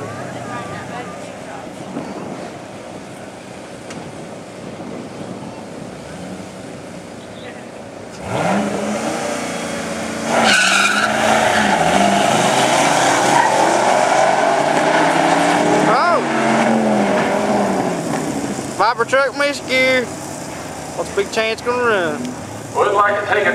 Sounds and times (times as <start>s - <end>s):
Car: 0.0s - 23.5s
Speech: 18.8s - 20.1s, 21.0s - 23.5s.